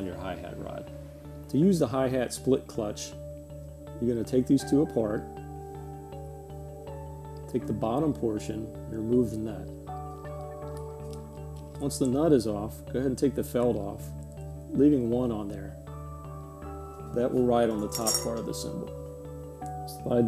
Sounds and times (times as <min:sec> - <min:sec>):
Music: 0:00.0 - 0:20.2
Speech: 0:01.5 - 0:03.2, 0:04.0 - 0:05.2, 0:07.5 - 0:09.7, 0:11.8 - 0:14.0, 0:14.7 - 0:15.8, 0:17.2 - 0:18.9, 0:19.9 - 0:20.2.